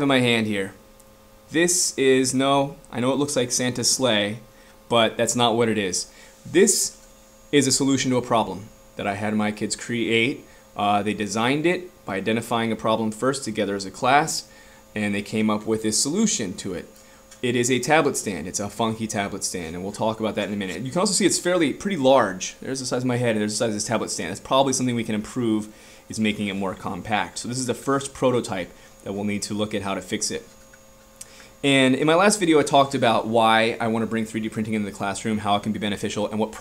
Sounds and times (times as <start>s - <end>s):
Speech: 0.0s - 0.8s, 1.5s - 30.5s, 31.6s - 36.6s.